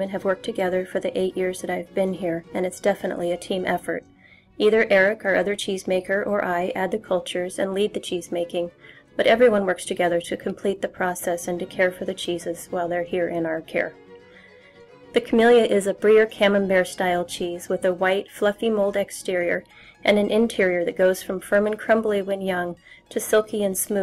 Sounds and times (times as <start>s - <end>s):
Speech: 0.0s - 4.0s, 4.6s - 13.9s, 15.2s - 24.0s
Music: 0.0s - 24.0s.